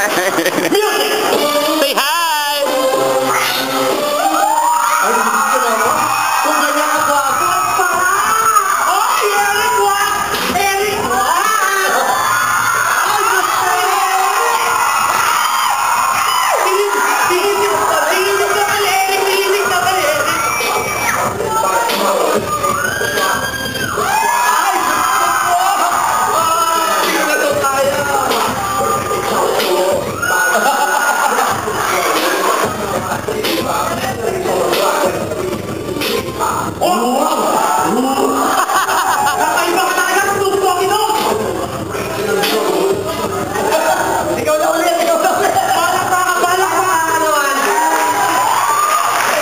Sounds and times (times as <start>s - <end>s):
Inside, large room or hall: 0.0s - 49.4s.